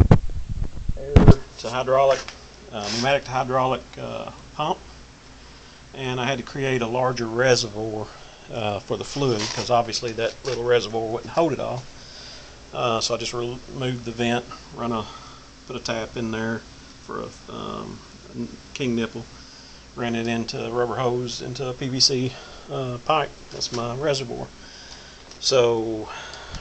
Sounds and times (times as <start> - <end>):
Speech: 1.0 - 4.8, 6.0 - 11.9, 12.8 - 19.3, 20.0 - 24.5, 25.4 - 26.2.